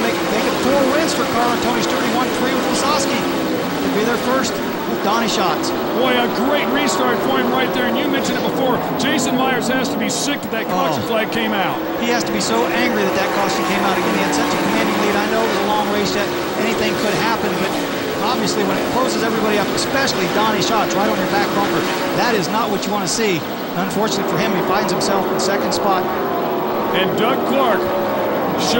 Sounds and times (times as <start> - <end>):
Speech: 0.0 - 26.1, 26.9 - 27.9, 28.5 - 28.7
Car passing by: 0.0 - 28.7.